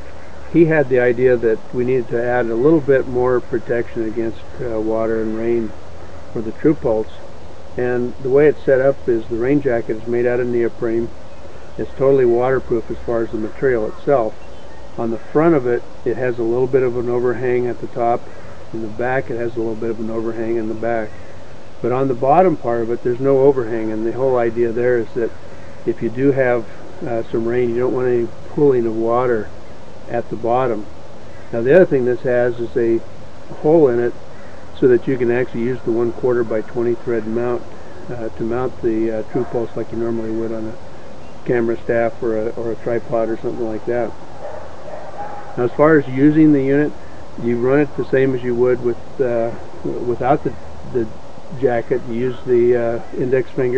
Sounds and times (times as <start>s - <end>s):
Speech: 0.5s - 5.7s, 6.4s - 7.2s, 7.8s - 11.1s, 11.8s - 14.4s, 15.0s - 21.2s, 21.8s - 25.3s, 25.9s - 29.5s, 30.1s - 30.9s, 31.5s - 34.2s, 34.8s - 40.8s, 41.4s - 44.1s, 45.6s - 53.7s.